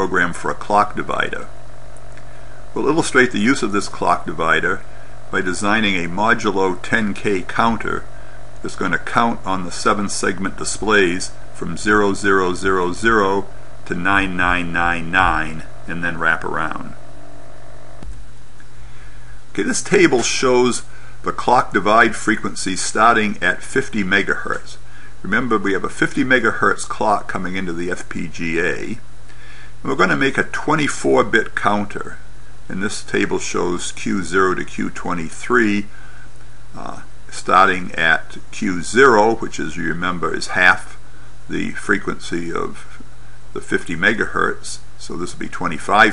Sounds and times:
Speech: 0.0 - 1.5, 2.7 - 17.0, 19.5 - 29.1, 29.8 - 36.0, 36.8 - 46.1.

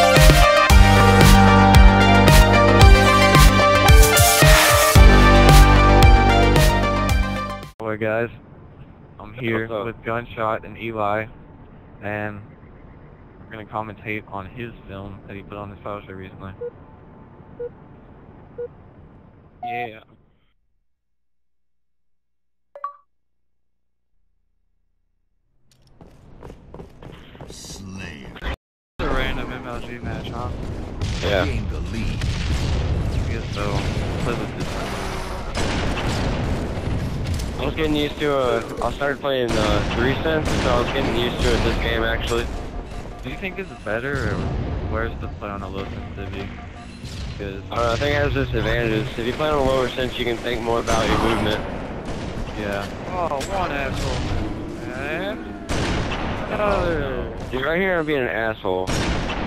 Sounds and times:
Speech: 7.8 - 8.4, 9.2 - 11.3, 12.0 - 12.5, 13.5 - 16.6, 19.6 - 20.1, 27.5 - 30.6, 31.2 - 32.2, 33.2 - 34.8, 37.6 - 42.5, 43.3 - 46.5, 47.4 - 51.6, 52.6 - 54.2, 54.8 - 55.5, 56.5 - 58.9
Fusillade: 30.5 - 38.9.

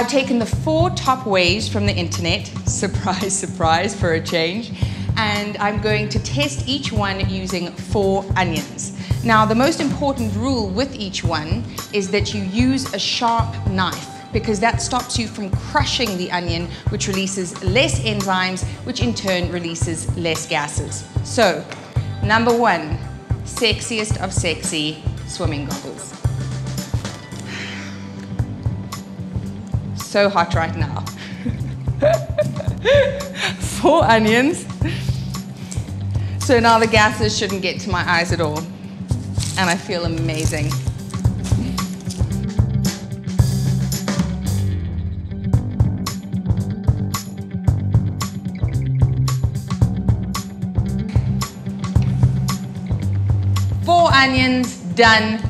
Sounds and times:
Speech: 0.0 - 26.2, 30.0 - 31.2, 33.6 - 35.0, 36.4 - 38.7, 39.5 - 40.8, 53.9 - 55.5
Music: 0.0 - 55.5.

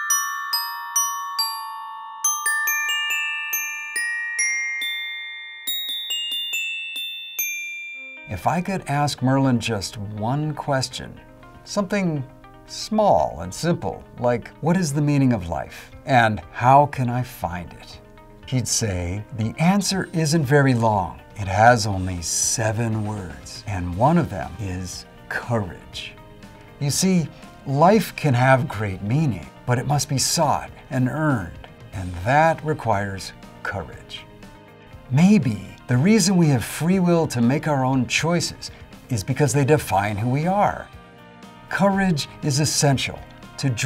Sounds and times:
Ding-dong: 0.0 - 8.4
Music: 0.0 - 43.8
Speech: 8.3 - 26.2, 26.8 - 34.3, 35.1 - 40.9, 41.7 - 43.8.

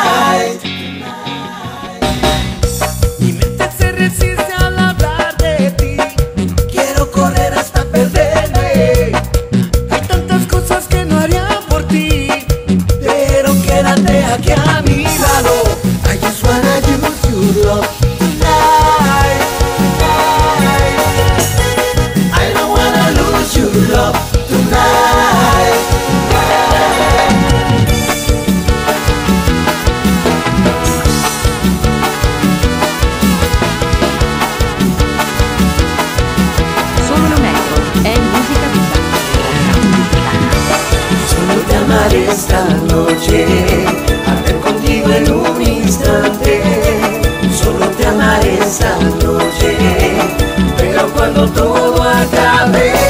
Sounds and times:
Music: 0.0 - 53.0.

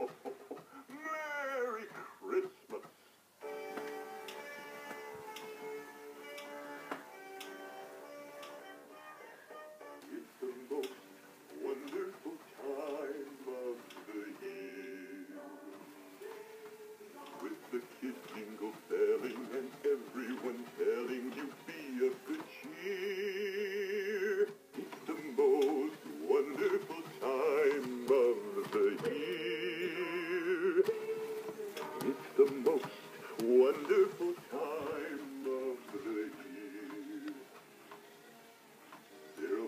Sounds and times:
Male singing: 10.0 - 37.5, 39.3 - 39.6
Synthetic singing: 10.0 - 37.5, 39.3 - 39.6.

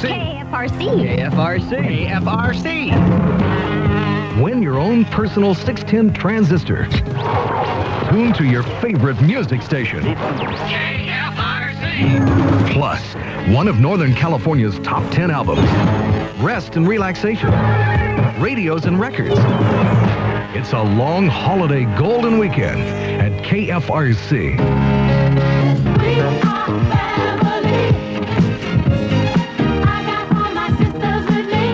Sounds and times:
Speech: 8.1 - 15.6, 16.4 - 17.6, 18.4 - 19.4, 20.6 - 24.6.

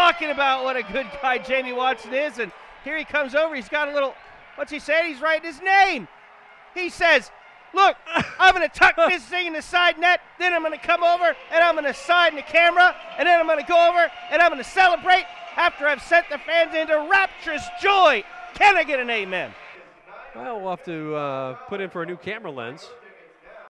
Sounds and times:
Speech: 0.0 - 6.1, 6.8 - 23.6.

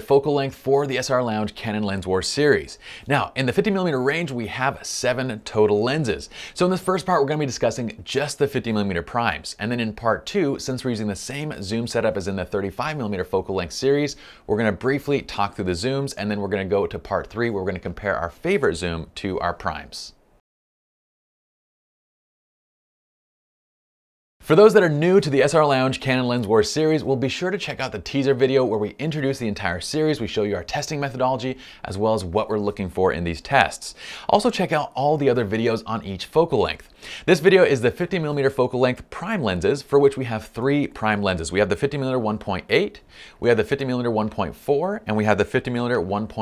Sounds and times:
Speech: 0.0 - 20.2, 24.4 - 46.4.

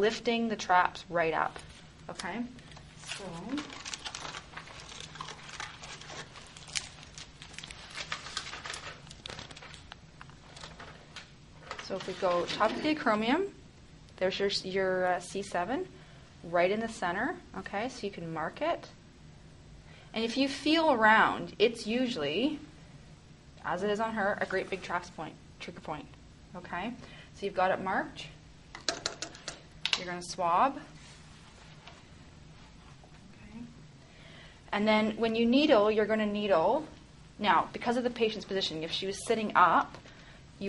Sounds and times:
Speech: 0.0 - 3.8, 11.8 - 13.6, 16.5 - 19.0, 20.2 - 22.7, 23.6 - 28.4, 34.8 - 39.9
Inside, small room: 0.0 - 40.6.

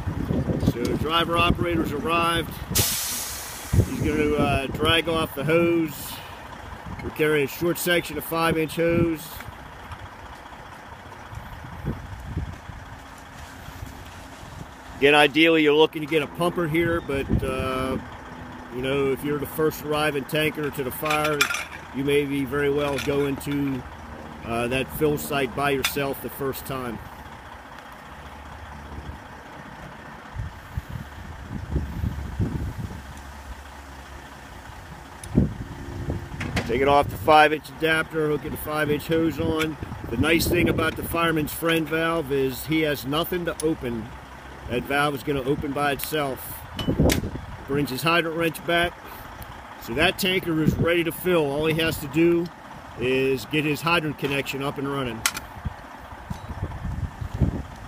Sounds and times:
Speech: 0.6 - 2.6, 3.9 - 6.3, 7.0 - 9.5, 15.0 - 18.0, 18.7 - 23.8, 24.4 - 27.0, 36.6 - 44.1, 44.7 - 46.6, 47.7 - 49.0, 49.8 - 55.2.

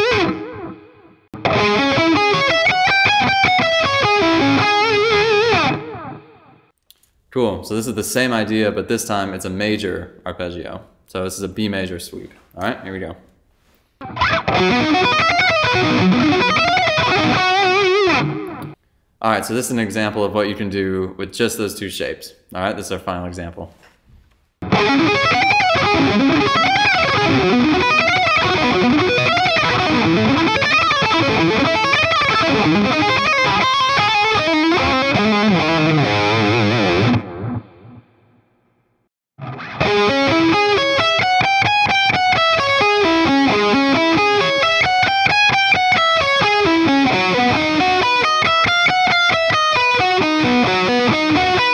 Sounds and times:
Electric guitar: 0.0 - 6.7, 14.0 - 18.8, 24.6 - 38.3, 39.4 - 51.7
Speech: 7.3 - 13.3, 19.2 - 23.8.

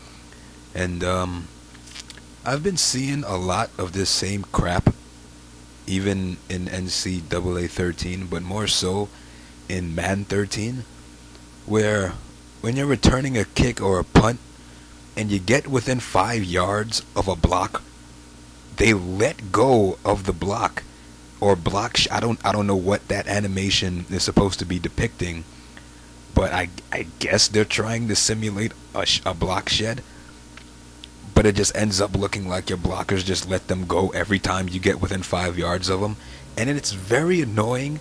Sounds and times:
Speech: 0.8 - 1.5, 2.4 - 5.0, 5.9 - 10.9, 11.7 - 14.4, 15.2 - 17.9, 18.8 - 25.5, 26.3 - 30.0, 31.2 - 38.0.

